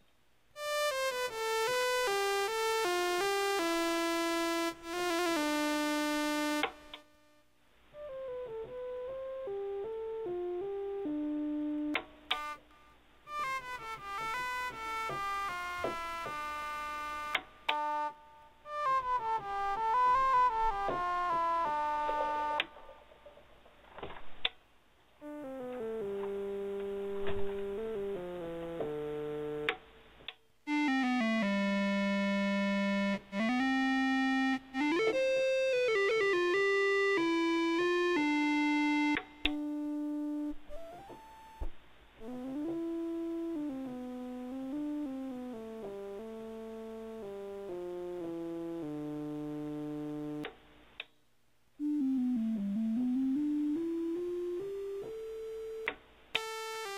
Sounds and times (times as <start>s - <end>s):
Synthesizer: 0.6s - 7.4s, 8.0s - 23.1s, 25.2s - 29.9s, 30.7s - 50.5s, 51.8s - 56.9s.